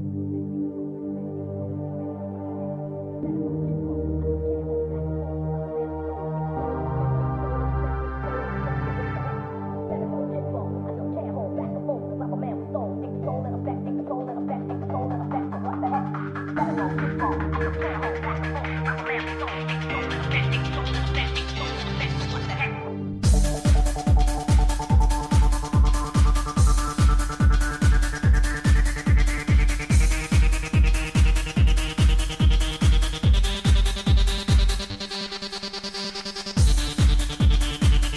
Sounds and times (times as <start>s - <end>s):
Music: 0.0s - 38.1s.